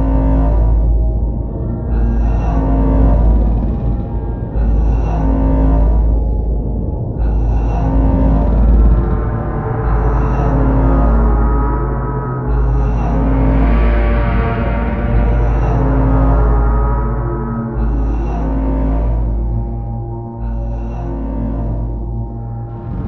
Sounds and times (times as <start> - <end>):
Scary music: 0.0 - 23.0.